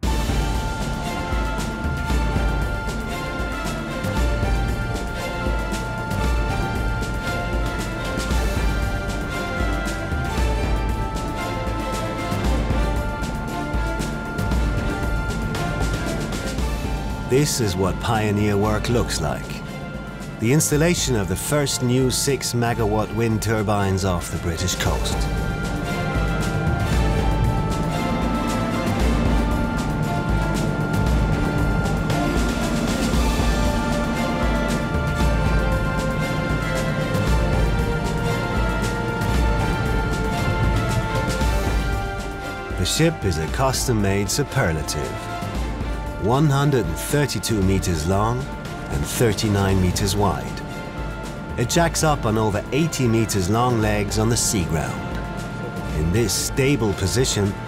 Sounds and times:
Music: 0.0s - 57.6s.

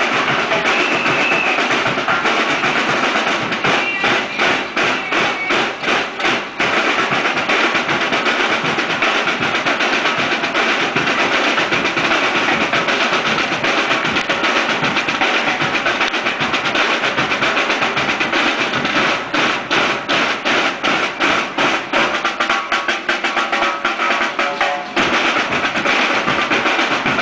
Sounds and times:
Music: 0.0s - 27.2s.

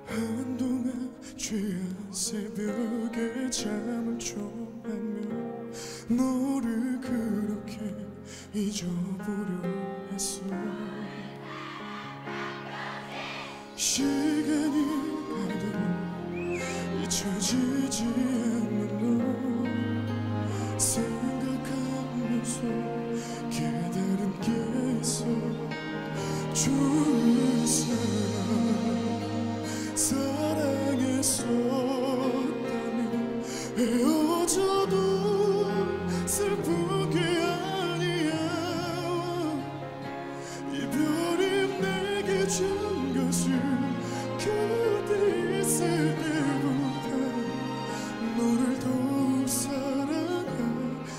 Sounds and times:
Music: 0.0s - 51.1s.

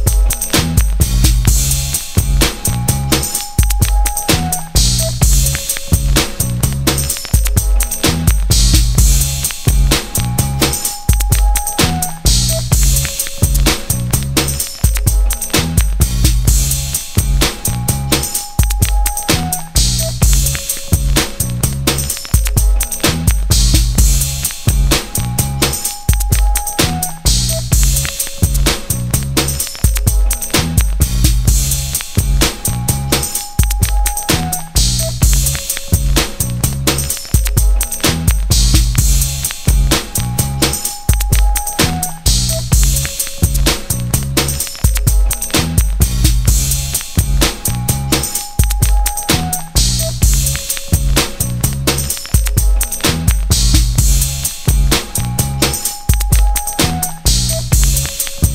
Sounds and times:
Music: 0.0s - 58.5s.

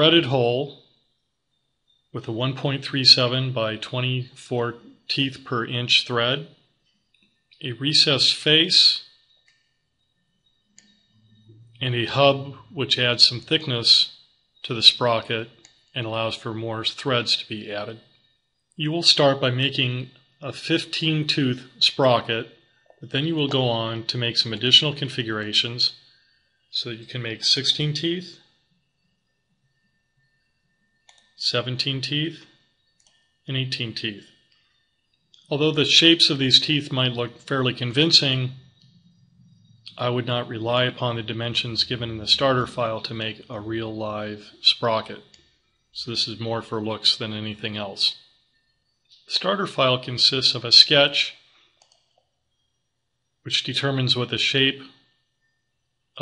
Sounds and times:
Speech: 0.0s - 0.8s, 2.2s - 6.6s, 7.6s - 9.1s, 11.4s - 18.0s, 18.8s - 26.0s, 26.7s - 28.4s, 31.4s - 32.5s, 33.5s - 34.3s, 35.5s - 38.7s, 39.8s - 45.3s, 46.0s - 48.2s, 49.2s - 51.4s, 53.5s - 55.0s.

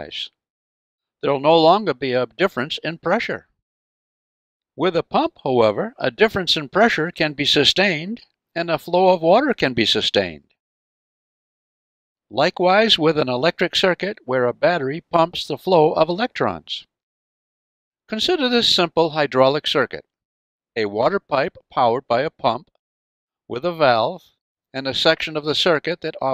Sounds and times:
Speech: 0.0s - 0.4s, 1.3s - 3.5s, 4.8s - 10.6s, 12.3s - 16.9s, 18.1s - 20.1s, 20.8s - 22.7s, 23.5s - 26.3s.

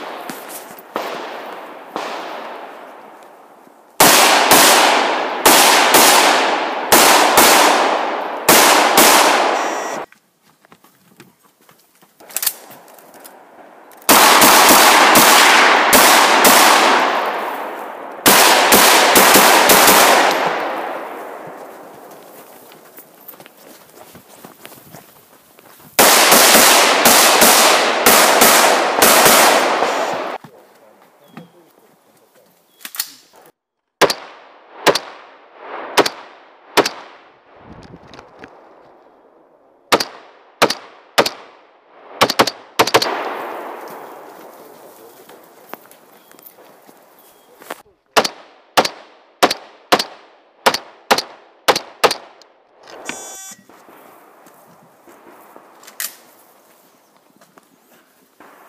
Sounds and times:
Outside, rural or natural: 0.0s - 58.6s.

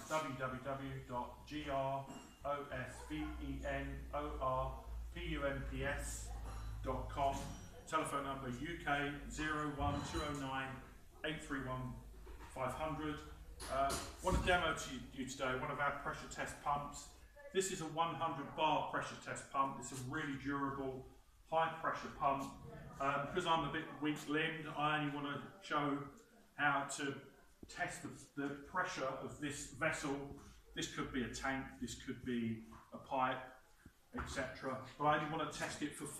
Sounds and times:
Speech: 0.0s - 36.1s.

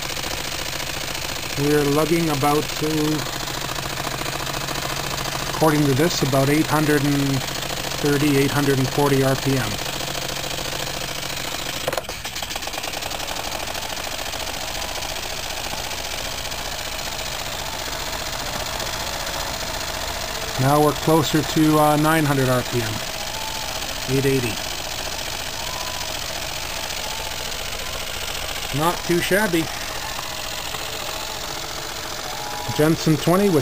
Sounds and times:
Engine: 0.0s - 33.6s
Speech: 1.6s - 3.2s, 5.6s - 7.4s, 8.0s - 9.8s, 20.6s - 23.0s, 24.1s - 24.6s, 28.7s - 29.7s, 32.7s - 33.6s.

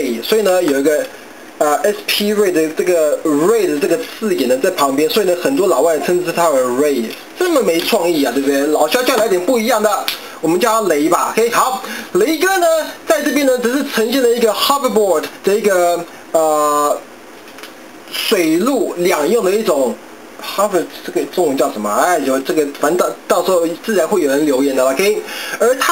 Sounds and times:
Speech: 0.0s - 17.1s, 18.1s - 25.9s.

